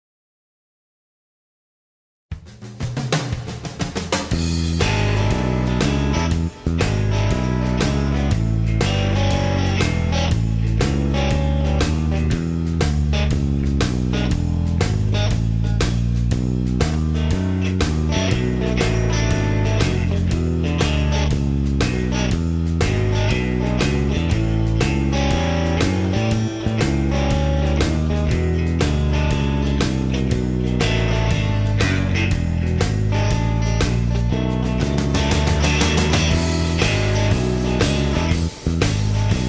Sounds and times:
Music: 0:02.3 - 0:39.4.

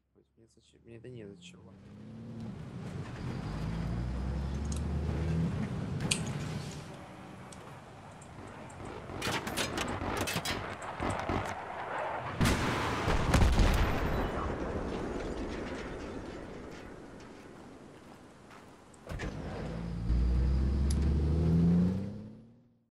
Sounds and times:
Outside, rural or natural: 0:00.0 - 0:22.9
Artillery fire: 0:08.7 - 0:17.9.

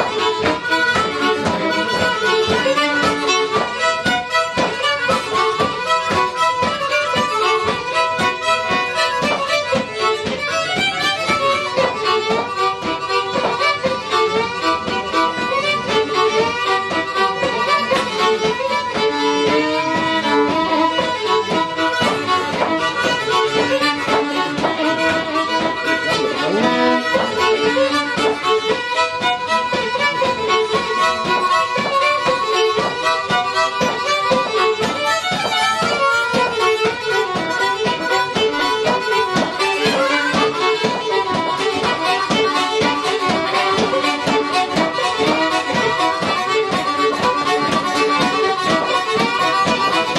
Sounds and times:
Violin, fiddle: 0:00.0 - 0:50.1.

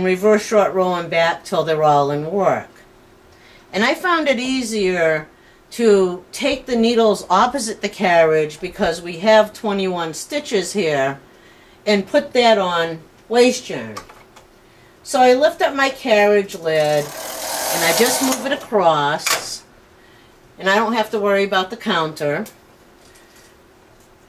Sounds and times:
Speech: 0:00.0 - 0:02.8, 0:03.7 - 0:11.2, 0:11.9 - 0:14.1, 0:15.1 - 0:17.1, 0:17.7 - 0:19.7, 0:20.6 - 0:22.6.

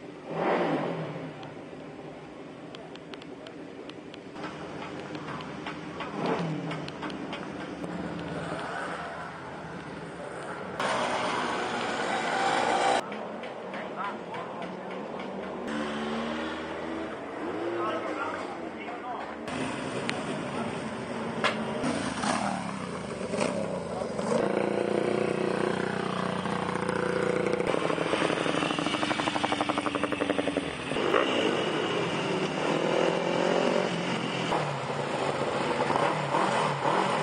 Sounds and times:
Motorcycle: 0:00.0 - 0:02.2, 0:02.8 - 0:13.1, 0:15.5 - 0:18.7, 0:19.4 - 0:37.2.

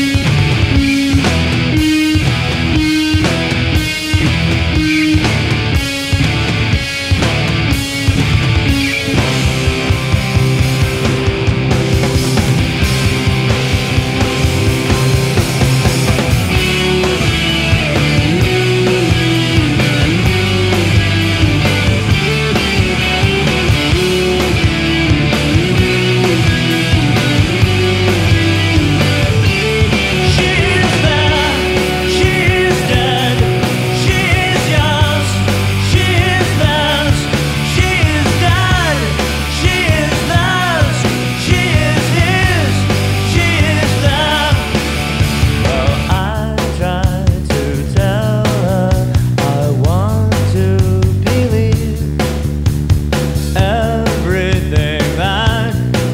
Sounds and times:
Music: 0:00.0 - 0:56.1.

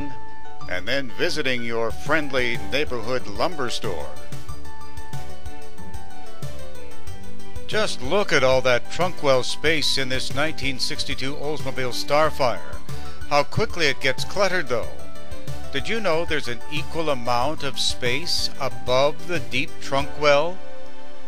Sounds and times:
Speech: 0:00.0 - 0:04.2, 0:07.7 - 0:15.0, 0:15.8 - 0:20.6
Music: 0:00.0 - 0:21.2.

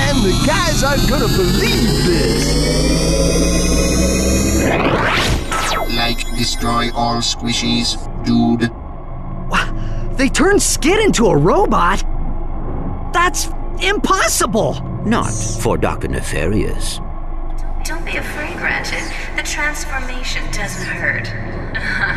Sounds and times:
Speech: 0:00.0 - 0:02.5, 0:05.9 - 0:08.7, 0:09.6 - 0:12.0, 0:13.2 - 0:17.0, 0:17.9 - 0:22.1.

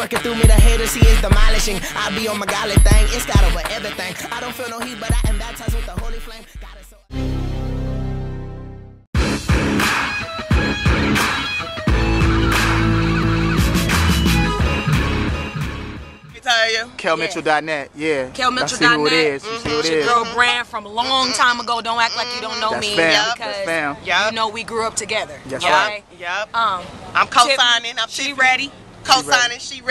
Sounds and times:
Music: 0:00.0 - 0:16.4.

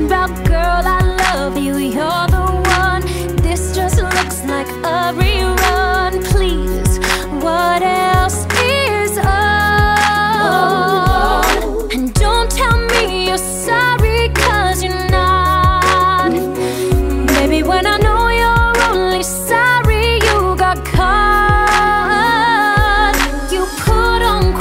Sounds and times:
Singing: 0:03.4 - 0:24.6.

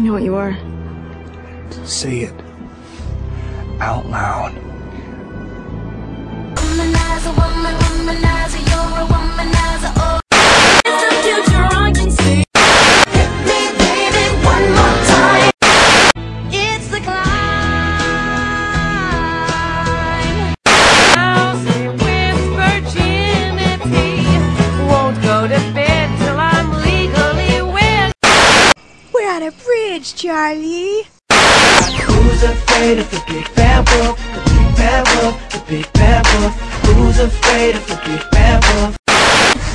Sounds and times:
Exciting music: 0:05.3 - 0:16.1, 0:31.4 - 0:39.4.

